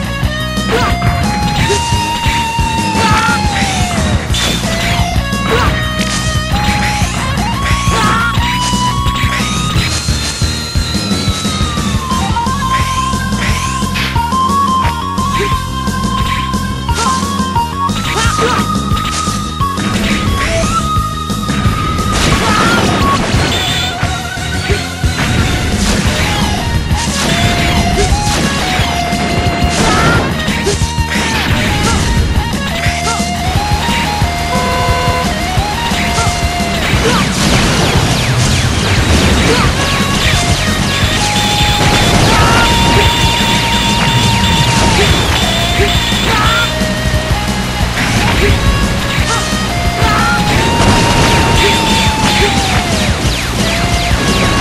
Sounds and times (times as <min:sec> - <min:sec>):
Music: 0:00.0 - 0:54.6.